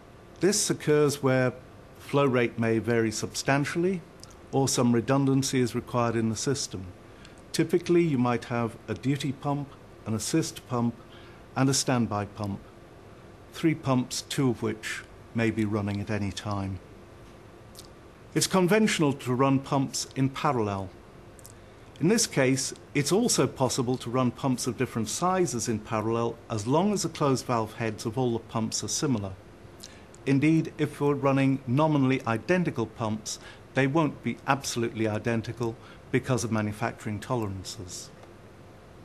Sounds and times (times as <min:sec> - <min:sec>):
Speech: 0:00.4 - 0:11.0, 0:11.6 - 0:12.7, 0:13.5 - 0:16.9, 0:18.3 - 0:21.0, 0:22.0 - 0:29.4, 0:30.2 - 0:38.2.